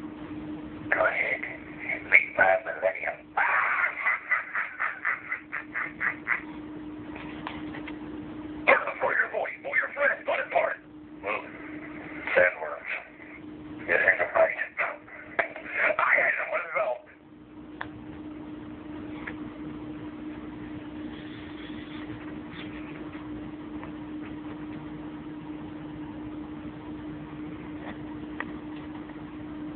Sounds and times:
Inside, small room: 0.0 - 29.7
Speech: 0.9 - 3.2, 8.7 - 11.5, 12.3 - 13.2, 13.8 - 15.1, 15.7 - 17.2.

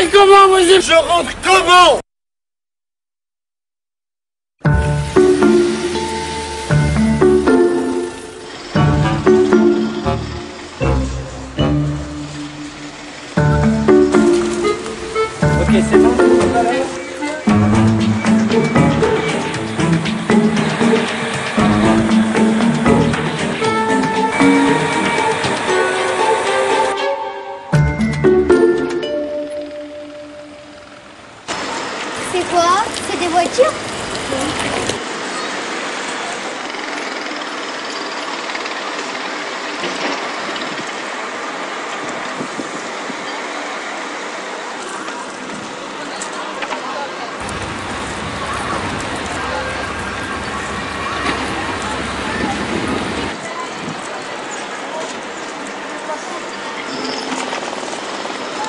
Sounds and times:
Speech: 0.0 - 2.0, 32.2 - 34.6, 44.8 - 47.4, 48.2 - 57.1
Music: 4.6 - 30.9.

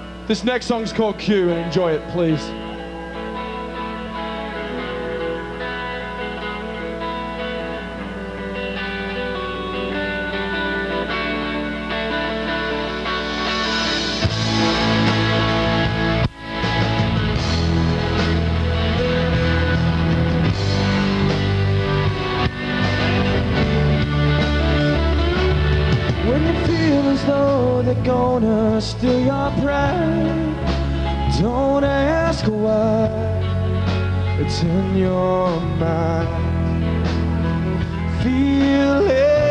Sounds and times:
Music: 0.0 - 39.5
Male singing: 26.2 - 30.6, 31.2 - 33.4, 34.4 - 36.5, 38.1 - 39.5.

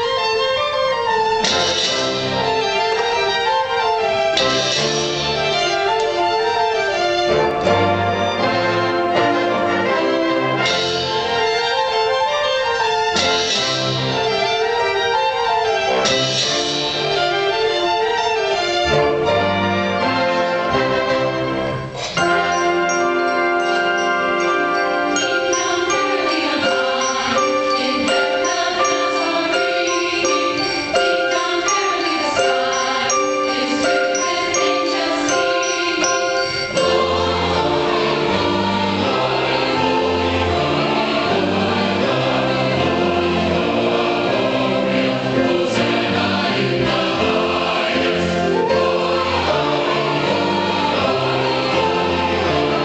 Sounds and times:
Choir: 0.0 - 52.8.

